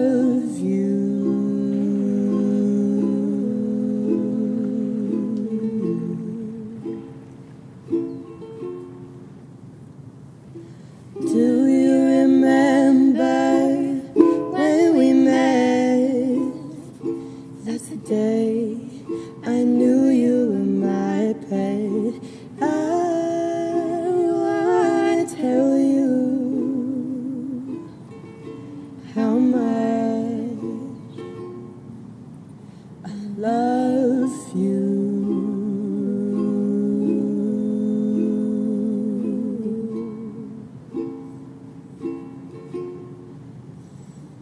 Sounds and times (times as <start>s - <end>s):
Music: 5.1s - 9.3s, 27.6s - 29.0s, 39.2s - 43.4s.